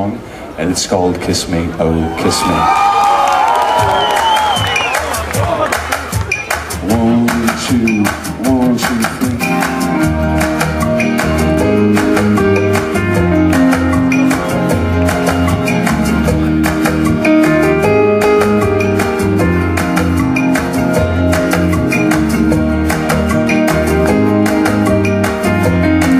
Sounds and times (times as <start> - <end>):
Music: 3.4 - 26.1.